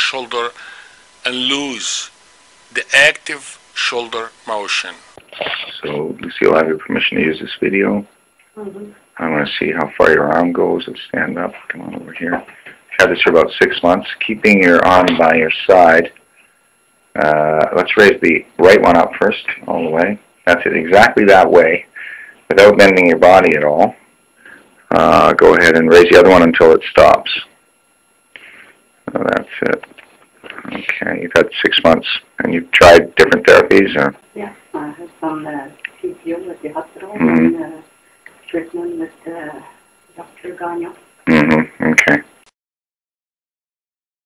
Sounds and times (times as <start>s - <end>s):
Speech: 0.0s - 0.7s, 1.3s - 2.1s, 2.8s - 16.2s, 17.2s - 21.9s, 22.5s - 24.0s, 24.9s - 27.5s, 29.1s - 29.8s, 30.5s - 37.8s, 40.3s - 42.3s.